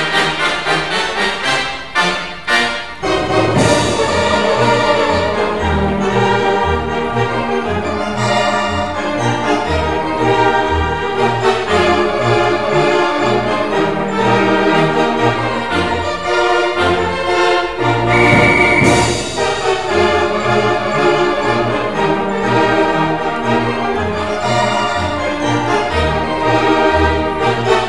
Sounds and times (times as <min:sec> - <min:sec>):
Music: 0:00.0 - 0:27.8.